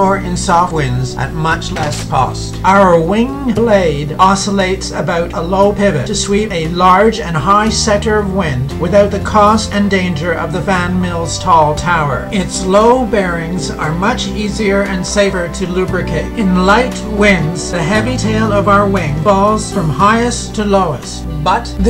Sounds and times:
Music: 0:00.0 - 0:21.8
Speech: 0:00.0 - 0:21.8.

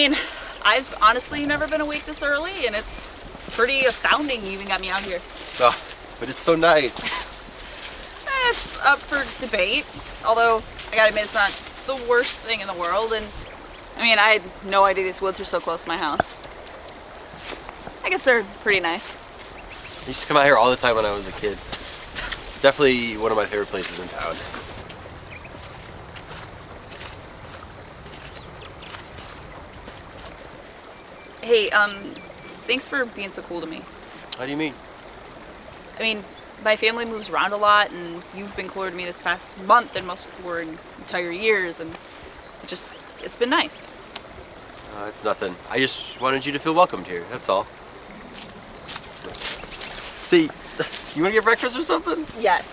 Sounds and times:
Speech: 0:00.0 - 0:06.9, 0:08.3 - 0:13.3, 0:14.0 - 0:16.4, 0:18.1 - 0:19.2, 0:20.1 - 0:21.6, 0:22.6 - 0:24.5, 0:31.4 - 0:33.8, 0:34.4 - 0:34.7, 0:36.0 - 0:41.9, 0:44.9 - 0:47.6, 0:51.2 - 0:52.7.

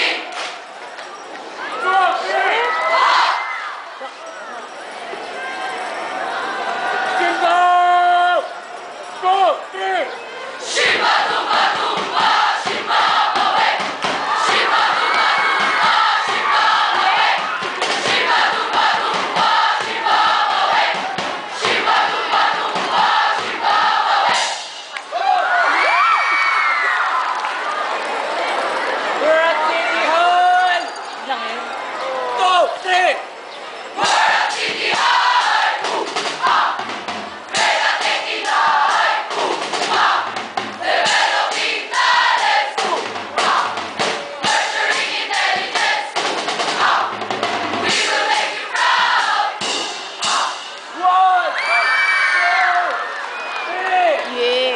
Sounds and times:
Choir: 0:00.0 - 0:00.6, 0:10.6 - 0:24.8, 0:34.0 - 0:50.8
Cheering: 0:00.0 - 0:33.3, 0:50.2 - 0:54.7.

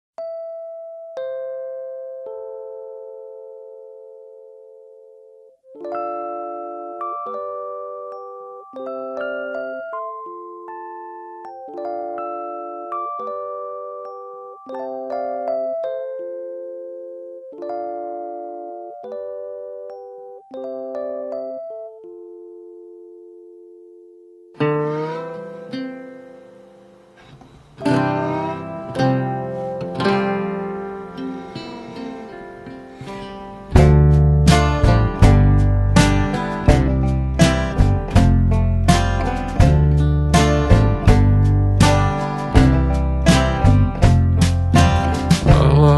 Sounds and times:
Glockenspiel: 0:00.2 - 0:23.2.

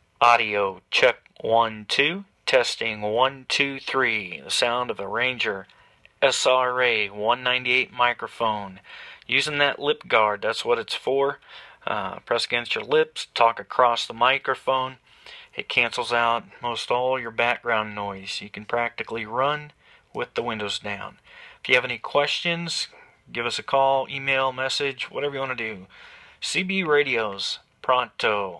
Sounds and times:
Speech: 0:00.2 - 0:28.5.

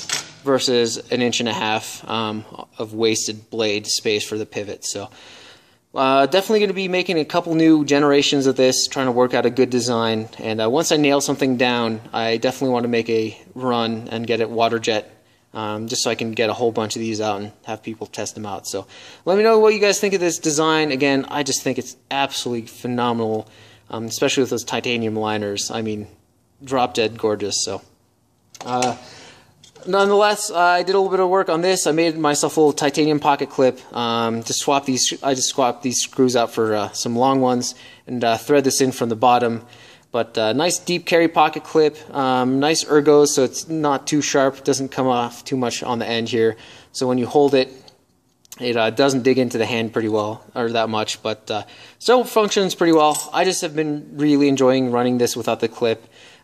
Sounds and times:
Speech: 0:00.4 - 0:05.1, 0:06.0 - 0:27.9, 0:28.6 - 0:29.0, 0:29.8 - 0:56.1.

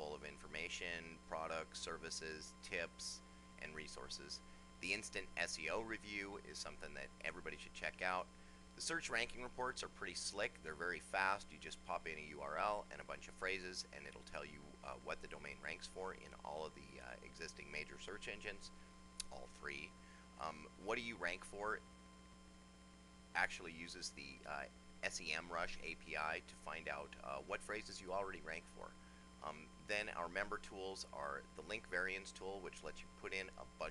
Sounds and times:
Speech: 0:00.0 - 0:21.8, 0:23.4 - 0:33.9.

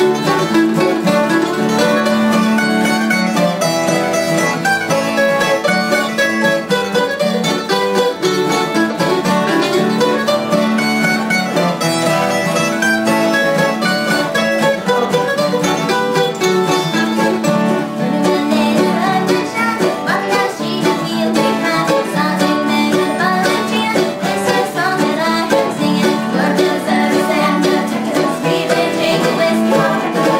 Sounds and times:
Bluegrass: 0:00.0 - 0:30.3.

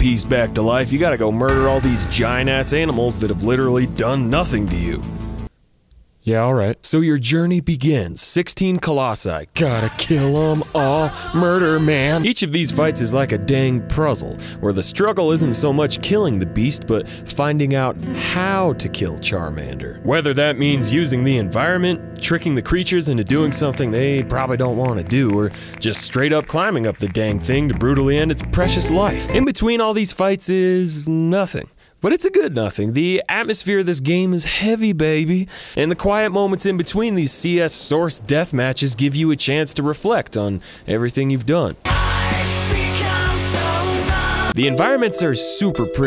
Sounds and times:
Speech: 0:00.0 - 0:05.1, 0:06.2 - 0:41.8, 0:44.6 - 0:46.0
Music: 0:00.0 - 0:05.5, 0:09.6 - 0:29.6, 0:41.9 - 0:46.0.

